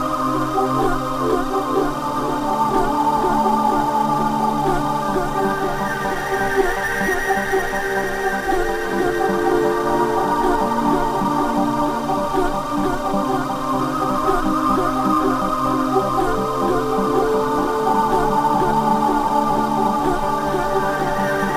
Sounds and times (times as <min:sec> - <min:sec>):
Electronic music: 0:00.0 - 0:21.5.